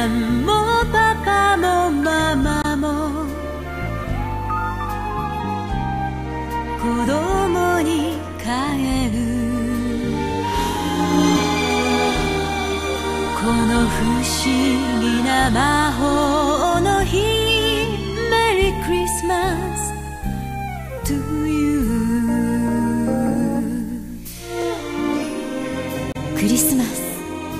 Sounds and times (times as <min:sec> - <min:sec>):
Christmas music: 0:00.0 - 0:22.0, 0:23.6 - 0:27.5.